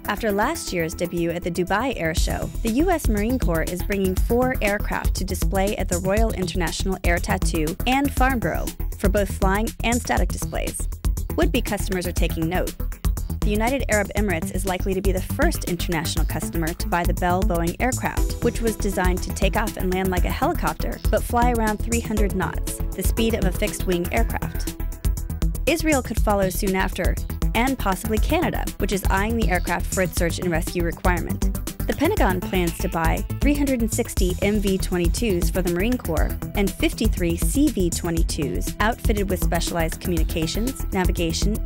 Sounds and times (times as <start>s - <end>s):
Speech: 0.0s - 10.8s, 11.4s - 12.8s, 13.4s - 24.7s, 25.7s - 41.6s
Music: 0.0s - 41.6s.